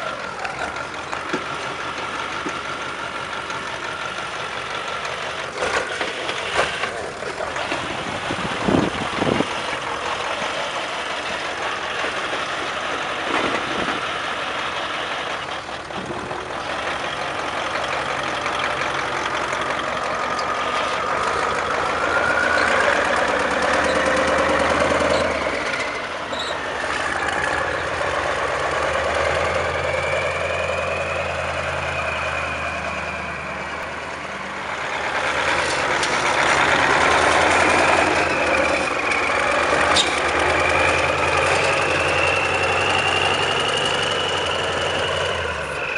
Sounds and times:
Truck: 0.0 - 45.9.

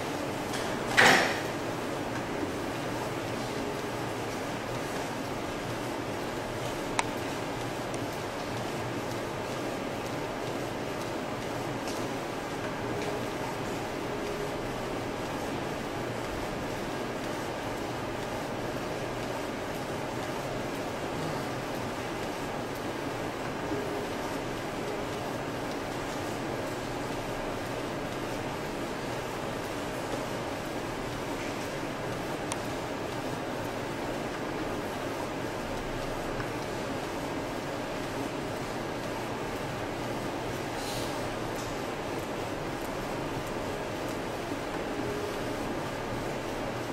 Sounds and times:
Printer: 0.0 - 46.9.

